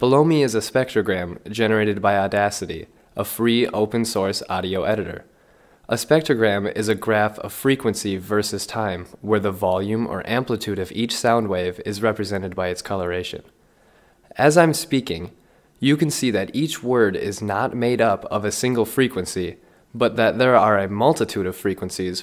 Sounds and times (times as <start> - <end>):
Speech: 0.0 - 5.3, 5.9 - 13.6, 14.3 - 22.2.